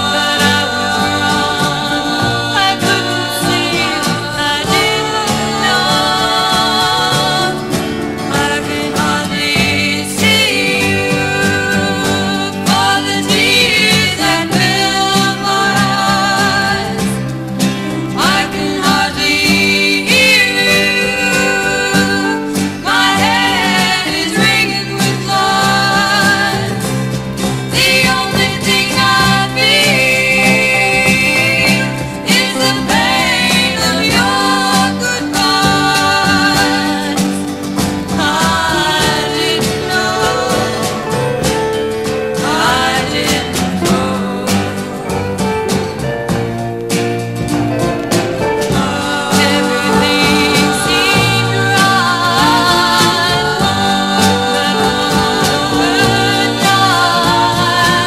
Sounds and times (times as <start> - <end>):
Jazz: 0.0 - 58.0
Swing music: 0.0 - 58.0.